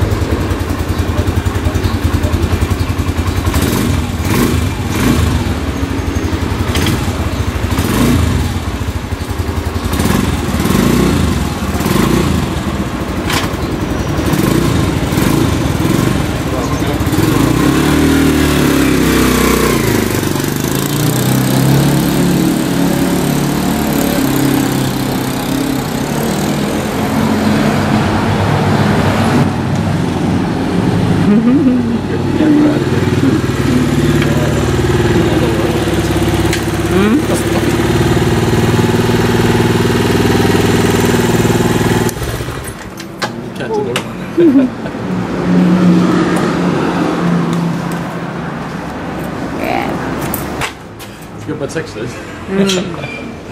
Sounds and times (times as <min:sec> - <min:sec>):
Idling: 0:00.0 - 0:17.4, 0:32.2 - 0:43.0
Motorcycle: 0:00.0 - 0:53.5.